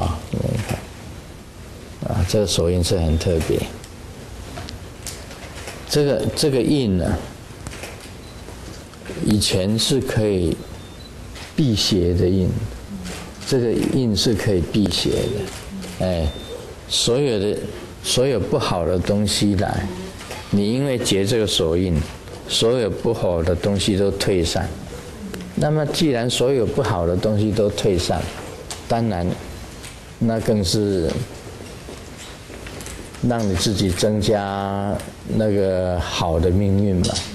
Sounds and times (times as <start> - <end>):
Speech: 0.0 - 0.8, 2.0 - 3.8, 5.9 - 7.3, 9.2 - 10.6, 11.6 - 29.4, 30.2 - 31.3, 33.2 - 37.3.